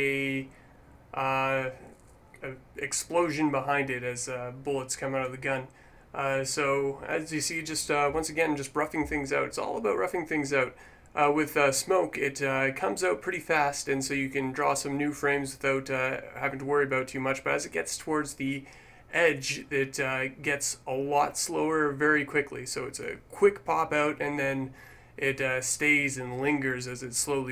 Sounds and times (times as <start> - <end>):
Speech: 0.0 - 0.5, 1.2 - 27.5.